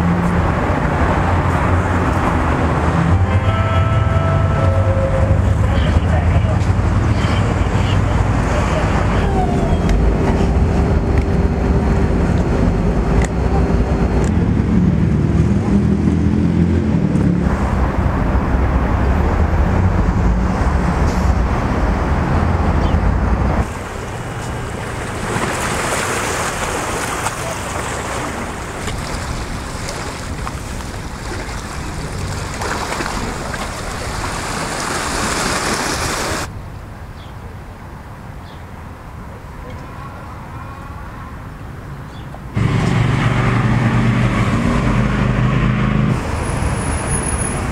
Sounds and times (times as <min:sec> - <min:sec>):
Waves, surf: 0:23.6 - 0:37.0.